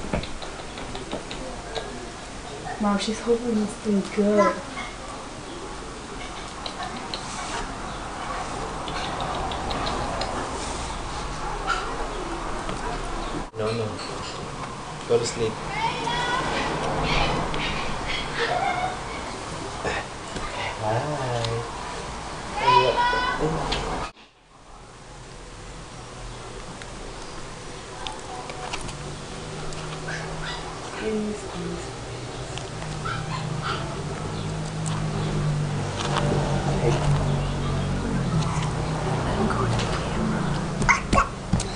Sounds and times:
Dog: 11.3s - 12.0s, 30.0s - 30.7s, 33.0s - 34.0s.

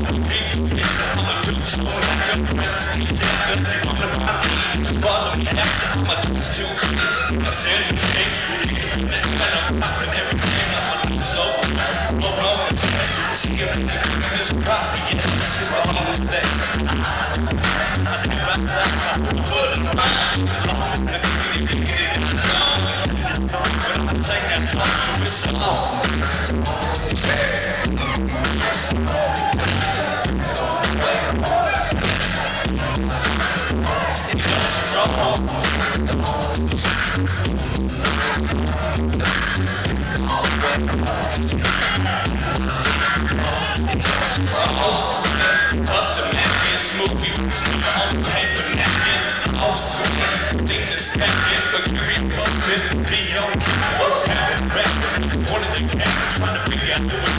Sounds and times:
Music: 0.0s - 57.3s.

